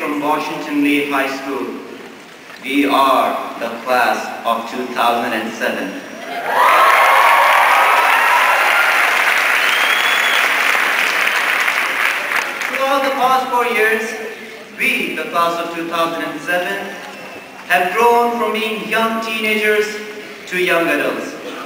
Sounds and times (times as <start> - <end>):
Male speech, man speaking: 0.0 - 1.8, 2.6 - 6.1, 12.7 - 17.0, 17.7 - 21.6
Narration, monologue: 0.0 - 6.2, 12.6 - 21.6.